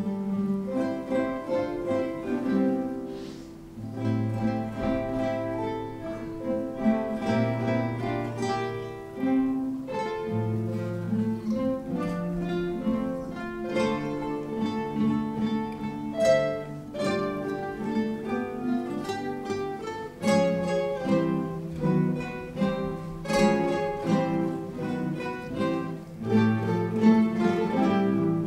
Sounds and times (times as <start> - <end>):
Strum: 0.0 - 28.4.